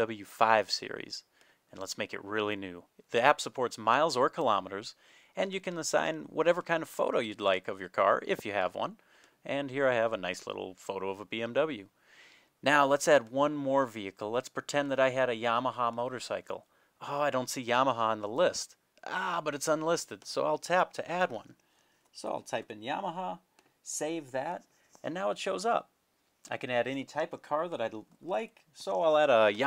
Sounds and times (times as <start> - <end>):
Speech: 0.0 - 11.9, 12.6 - 25.9, 26.5 - 29.6.